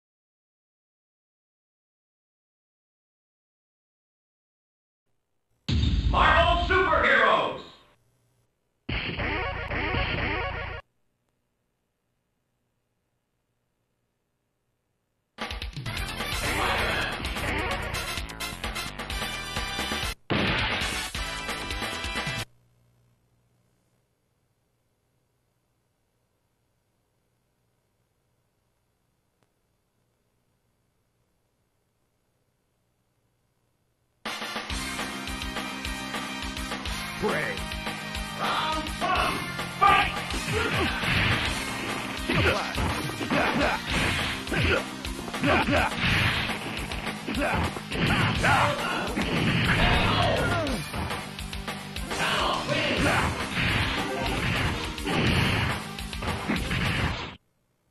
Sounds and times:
Speech: 0:06.1 - 0:07.8, 0:37.2 - 0:37.6, 0:38.4 - 0:41.0, 0:47.4 - 0:49.2, 0:52.1 - 0:53.3
Music: 0:09.2 - 0:10.8, 0:15.4 - 0:22.5, 0:34.2 - 0:56.9.

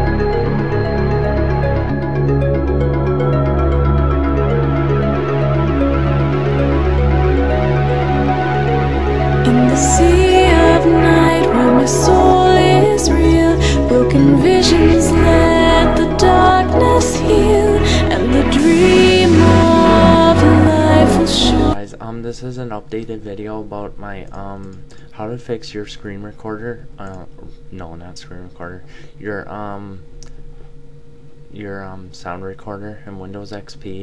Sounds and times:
Speech: 0:09.5 - 0:30.0, 0:31.6 - 0:34.0.

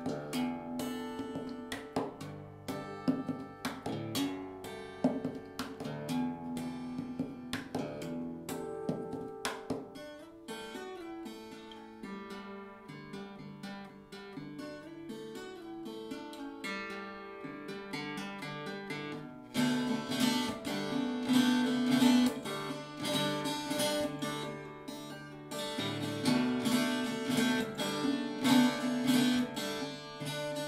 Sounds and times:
Acoustic guitar: 0:00.0 - 0:30.6
Tapping (guitar technique): 0:00.0 - 0:30.6.

